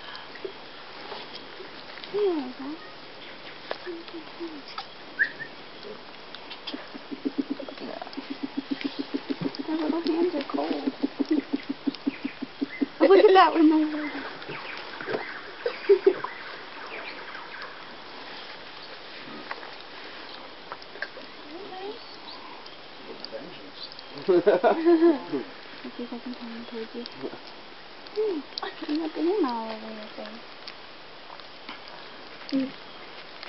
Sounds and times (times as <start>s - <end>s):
Bird: 2.4s - 19.4s, 23.5s - 24.4s.